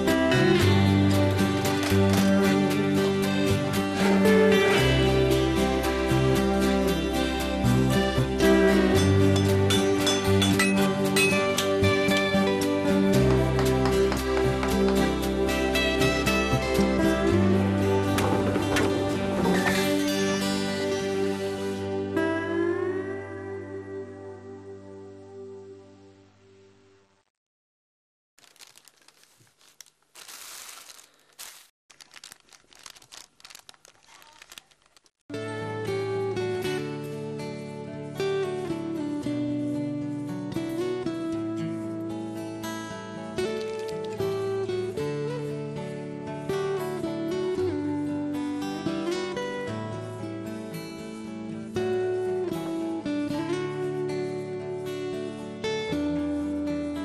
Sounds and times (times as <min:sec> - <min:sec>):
Music: 0:00.0 - 0:27.3, 0:35.3 - 0:57.0.